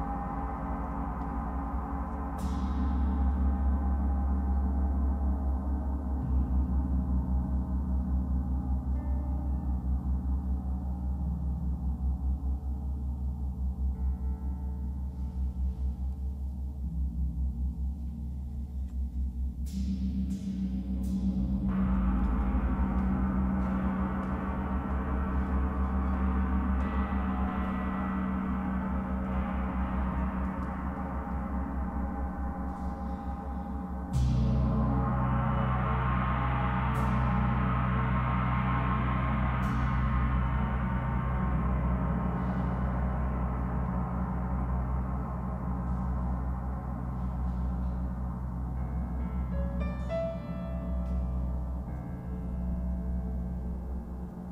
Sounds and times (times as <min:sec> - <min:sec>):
Music: 0:00.0 - 0:54.5.